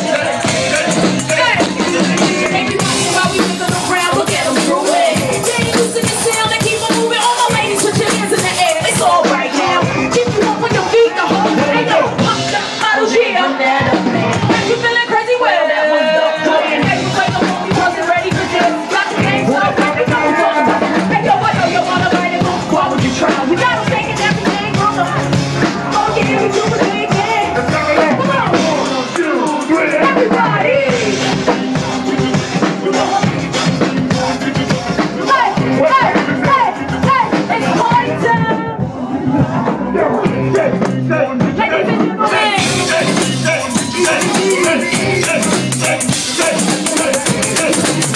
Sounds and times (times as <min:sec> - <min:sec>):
Musical instrument: 0:00.0 - 0:48.1.